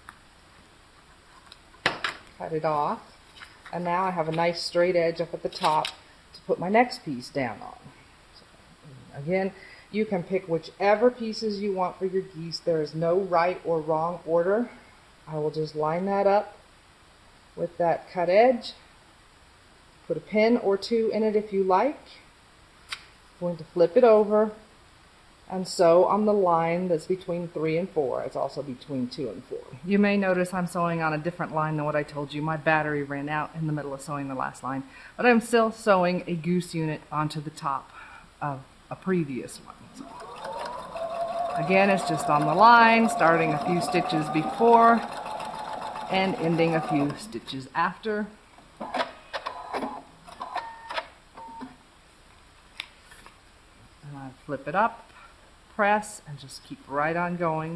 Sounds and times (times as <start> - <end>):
Speech: 2.4 - 3.1, 3.7 - 7.9, 8.9 - 16.6, 17.6 - 18.8, 20.1 - 22.3, 23.4 - 24.7, 25.5 - 39.9, 41.5 - 45.1, 46.1 - 48.4, 54.0 - 55.1, 55.8 - 57.7.